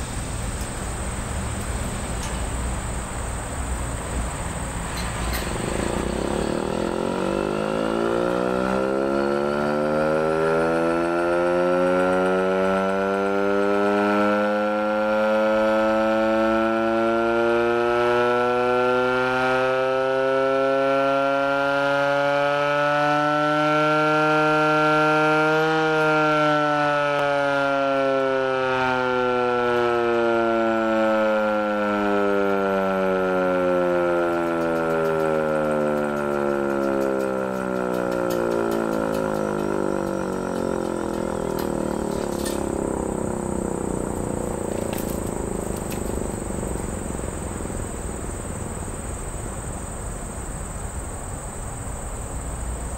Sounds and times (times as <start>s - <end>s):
Civil defense siren: 5.5s - 49.7s.